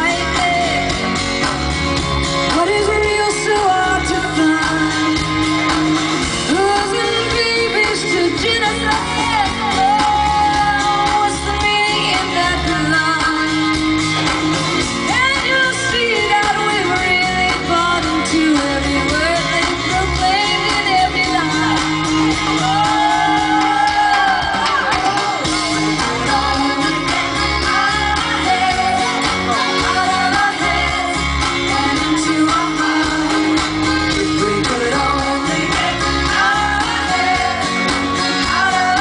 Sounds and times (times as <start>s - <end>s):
Music: 0.0s - 39.0s.